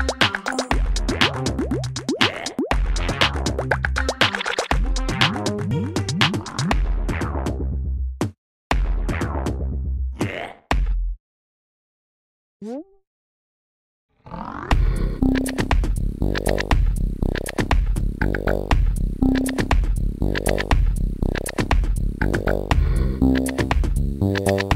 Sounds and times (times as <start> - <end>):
Music: 0.0 - 10.1, 14.7 - 24.7.